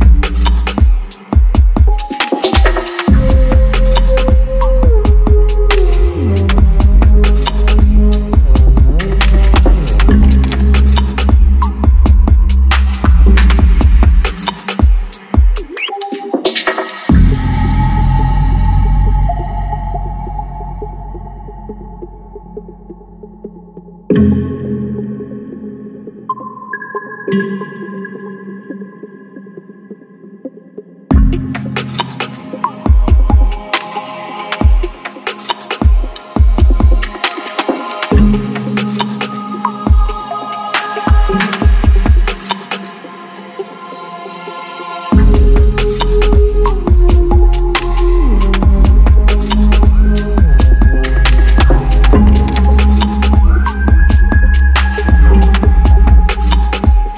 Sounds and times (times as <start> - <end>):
Electronica: 0.0 - 57.1.